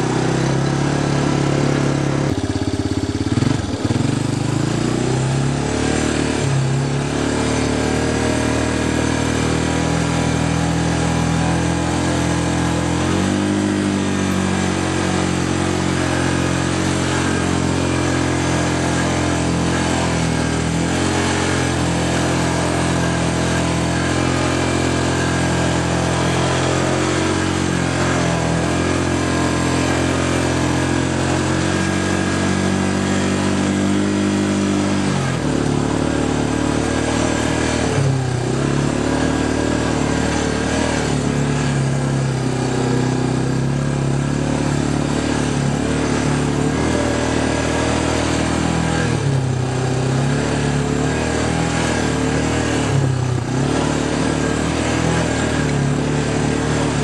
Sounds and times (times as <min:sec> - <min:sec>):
Outside, rural or natural: 0:00.0 - 0:57.0
Vehicle: 0:00.0 - 0:57.0.